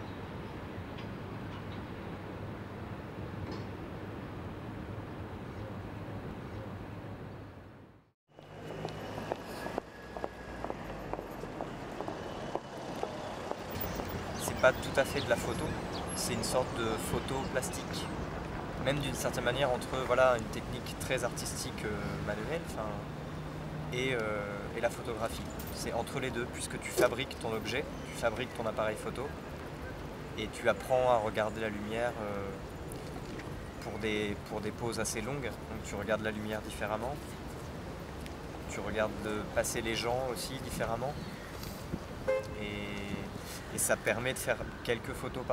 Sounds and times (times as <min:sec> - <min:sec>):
Speech: 0:14.4 - 0:18.1, 0:18.8 - 0:23.1, 0:23.9 - 0:29.4, 0:30.4 - 0:32.6, 0:33.8 - 0:37.4, 0:38.7 - 0:41.2, 0:42.6 - 0:45.5.